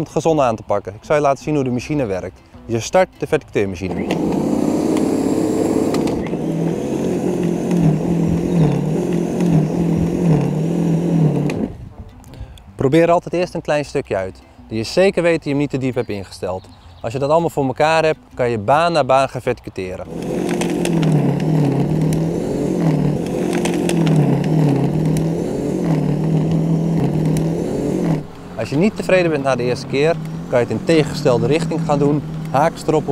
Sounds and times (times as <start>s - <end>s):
Speech: 0.0s - 4.0s, 12.8s - 20.1s, 28.6s - 33.1s.